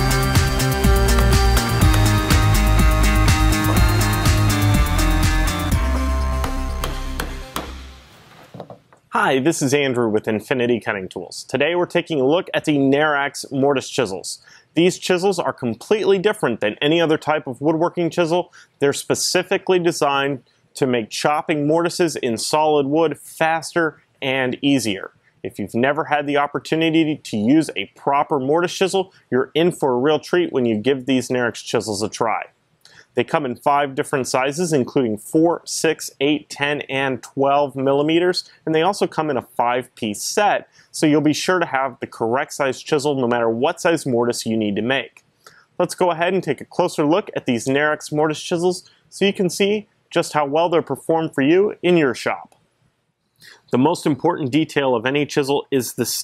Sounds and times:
Speech: 9.1s - 32.5s, 33.1s - 45.2s, 45.8s - 52.6s, 53.5s - 56.2s.

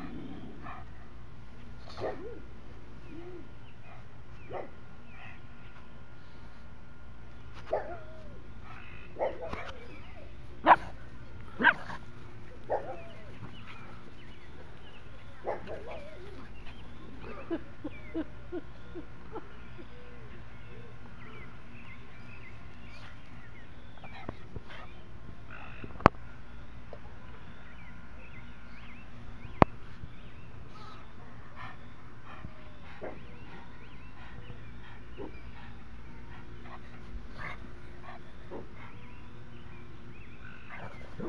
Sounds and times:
Outside, rural or natural: 0.0s - 41.2s.

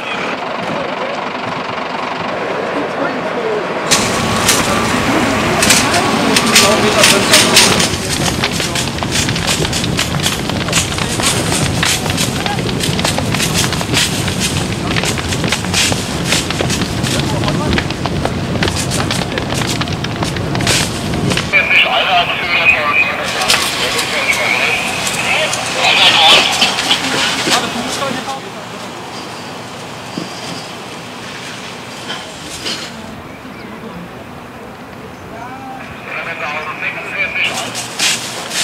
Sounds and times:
Eruption: 2.2s - 38.6s
Speech: 2.7s - 3.8s, 4.6s - 9.0s, 17.1s - 17.8s, 21.5s - 29.1s, 35.1s - 37.9s.

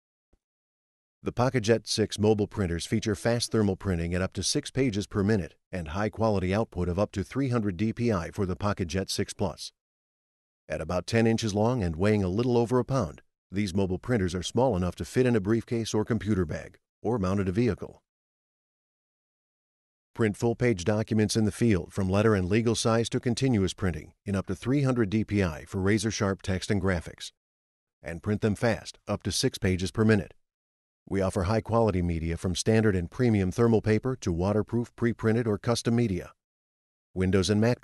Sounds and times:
Speech: 1.2s - 9.8s, 10.7s - 18.0s, 20.2s - 27.4s, 28.0s - 30.4s, 31.1s - 36.4s, 37.2s - 37.8s.

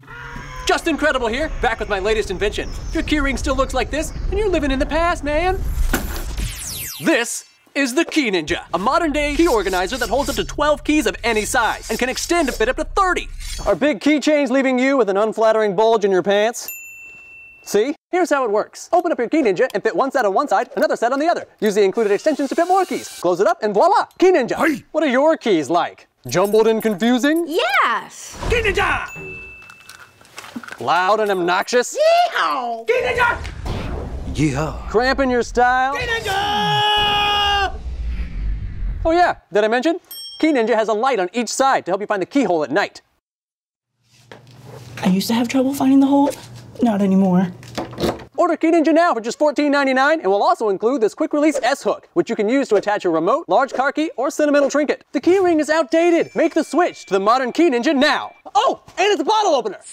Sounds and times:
Speech: 7.0s - 16.7s, 17.7s - 29.1s, 34.4s - 36.9s, 39.1s - 43.0s, 48.4s - 59.9s
Keys jangling: 29.2s - 31.5s.

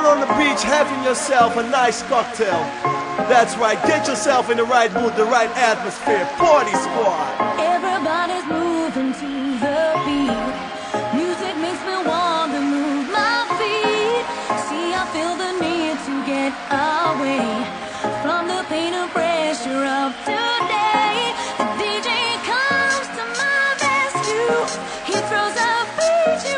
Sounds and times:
Speech: 0.0s - 2.7s, 3.3s - 7.3s
Crowd: 0.0s - 26.5s
Music: 0.0s - 26.5s.

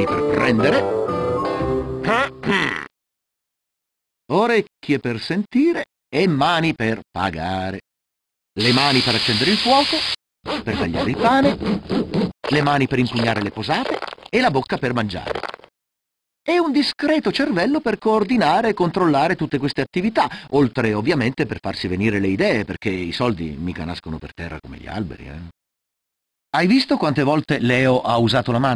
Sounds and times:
Speech: 0.0s - 0.9s, 2.0s - 2.9s, 4.3s - 7.9s, 8.6s - 10.0s, 10.6s - 11.6s, 12.5s - 15.4s, 16.5s - 25.6s, 26.6s - 28.7s.

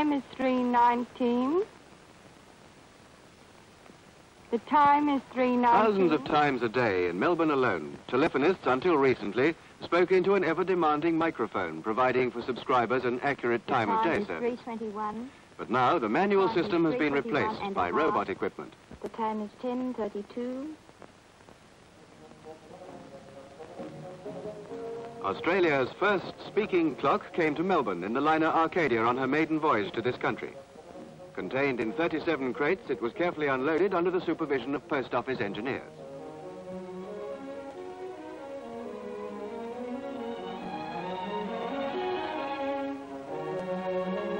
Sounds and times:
Music: 0.0s - 1.7s, 4.5s - 44.3s
Speech: 0.0s - 1.7s, 4.5s - 20.8s, 25.3s - 30.6s, 31.4s - 35.9s.

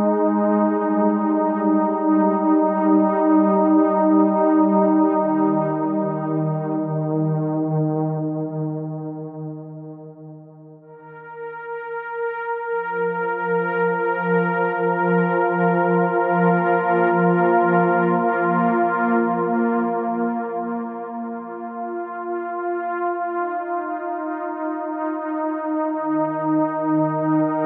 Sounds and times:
Music: 0.0s - 27.6s.

